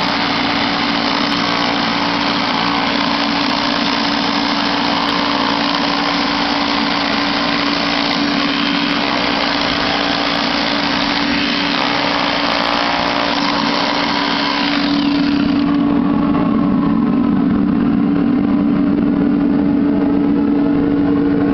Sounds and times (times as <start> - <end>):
Drill: 0.0 - 16.1.